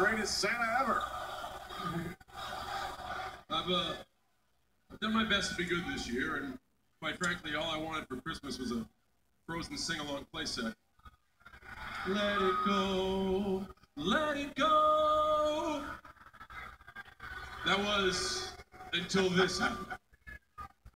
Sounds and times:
Speech: 0:00.0 - 0:01.0, 0:03.5 - 0:04.0, 0:05.0 - 0:08.9, 0:09.5 - 0:10.8, 0:17.6 - 0:20.0
Male singing: 0:12.1 - 0:15.9.

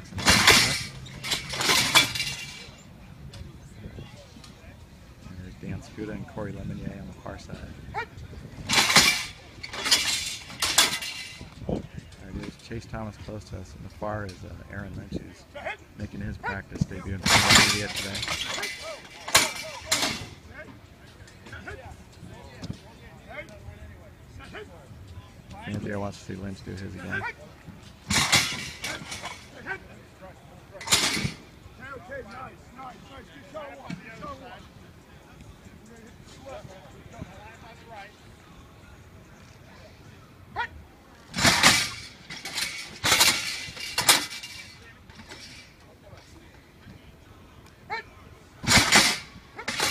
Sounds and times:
Speech: 0:03.7 - 0:07.8, 0:12.1 - 0:18.3, 0:25.5 - 0:27.4.

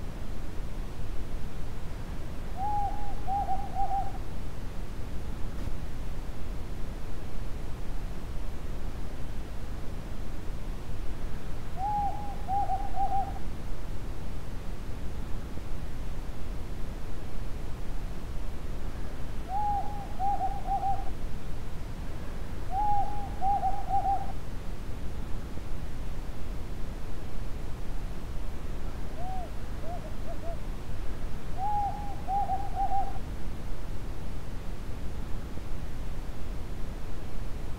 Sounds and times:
Hoot: 0:02.6 - 0:04.2, 0:11.8 - 0:13.4, 0:19.5 - 0:21.1, 0:22.7 - 0:24.4, 0:29.2 - 0:30.6, 0:31.6 - 0:33.2.

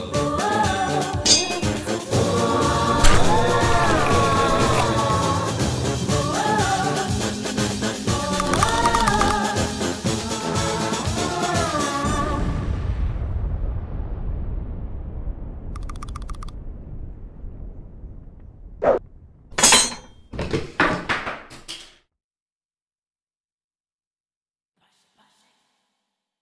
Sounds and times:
Music: 0:00.0 - 0:12.6.

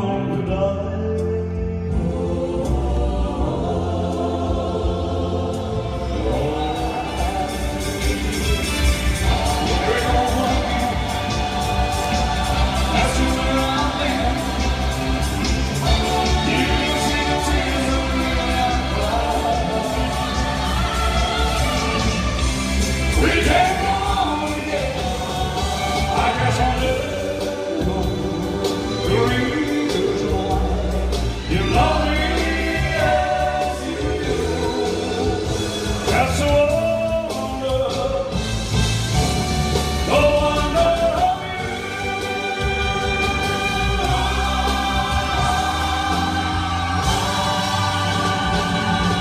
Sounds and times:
Singing: 0:00.0 - 0:39.2, 0:39.8 - 0:49.2
Music: 0:00.0 - 0:49.2.

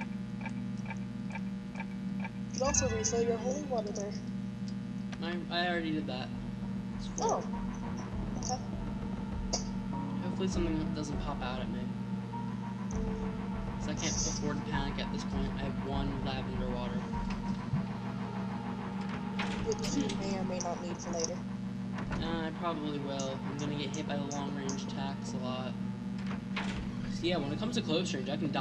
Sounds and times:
Speech: 0:02.6 - 0:04.2, 0:05.2 - 0:06.3, 0:07.0 - 0:07.4, 0:10.2 - 0:11.9, 0:13.8 - 0:17.1, 0:19.7 - 0:21.4, 0:22.2 - 0:25.8, 0:27.1 - 0:28.6.

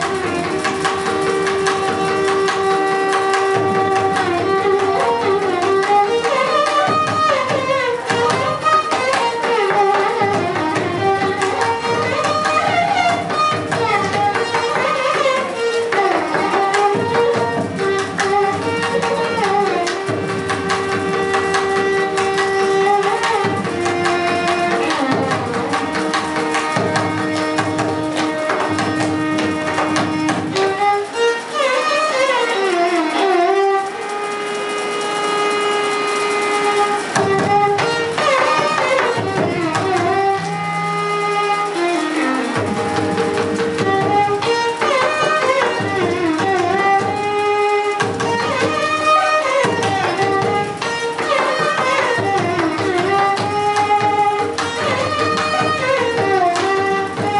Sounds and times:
Inside, large room or hall: 0:00.0 - 0:57.4
Violin, fiddle: 0:00.0 - 0:57.4.

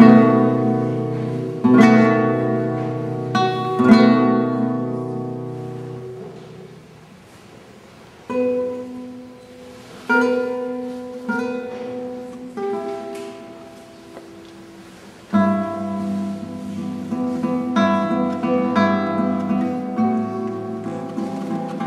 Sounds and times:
Strum: 0:00.0 - 0:07.5, 0:08.2 - 0:21.8.

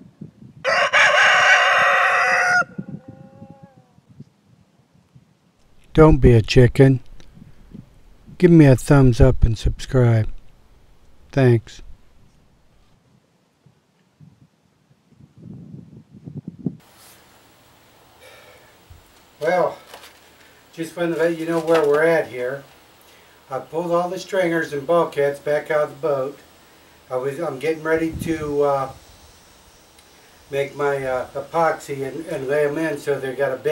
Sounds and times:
Speech: 0:05.9 - 0:07.0, 0:08.4 - 0:10.3, 0:11.4 - 0:11.8, 0:19.4 - 0:19.9, 0:20.7 - 0:22.7, 0:23.5 - 0:26.4, 0:27.1 - 0:29.0, 0:30.5 - 0:33.7.

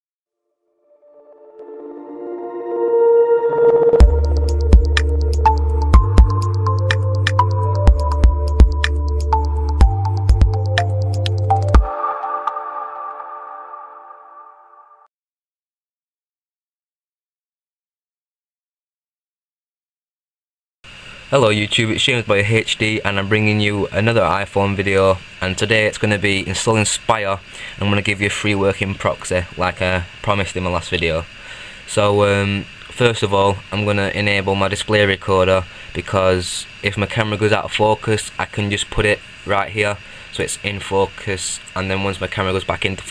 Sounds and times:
Music: 0:00.6 - 0:15.1.

